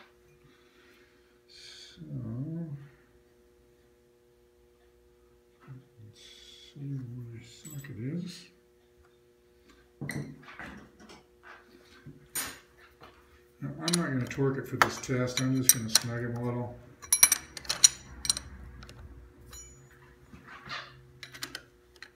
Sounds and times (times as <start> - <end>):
Speech: 1.5 - 3.0, 5.6 - 8.6, 13.6 - 16.8.